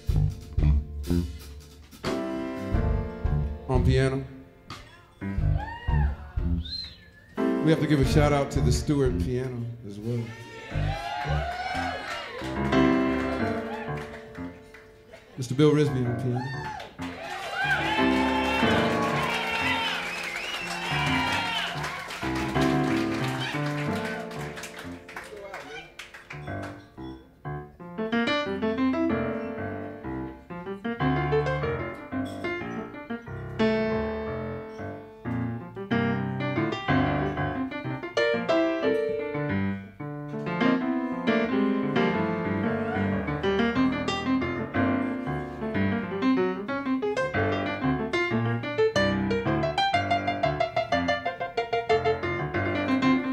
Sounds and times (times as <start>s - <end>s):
Piano: 0.0s - 53.3s.